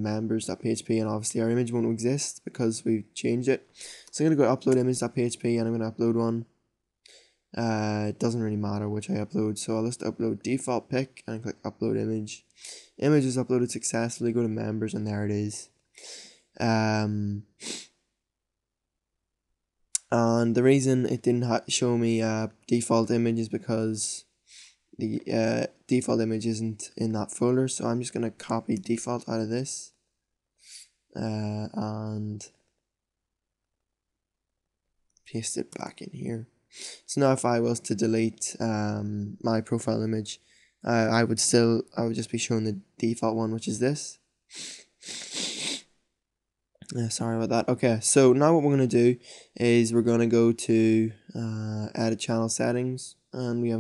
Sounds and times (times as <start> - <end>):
Speech: 0.0 - 6.5, 7.6 - 15.7, 16.6 - 17.8, 20.0 - 24.2, 25.0 - 29.9, 30.7 - 32.5, 35.3 - 44.2, 46.8 - 53.8
Inside, small room: 0.0 - 53.8.